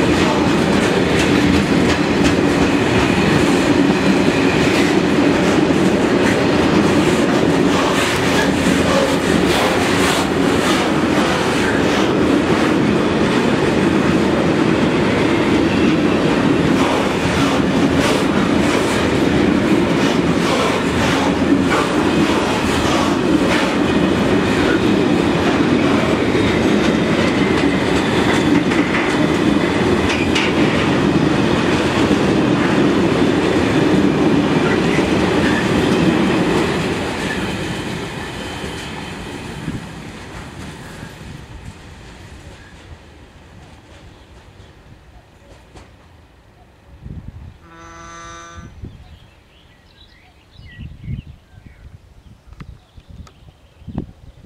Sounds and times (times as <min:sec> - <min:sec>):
Outside, rural or natural: 0:00.0 - 0:54.4
Railroad car, train wagon: 0:00.0 - 0:54.4
Train: 0:00.0 - 0:54.4.